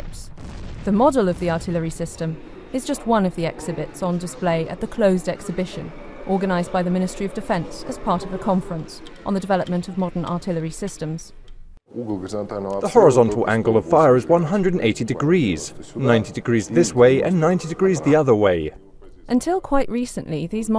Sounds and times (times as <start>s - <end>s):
Speech: 0.9s - 11.3s, 11.9s - 20.7s.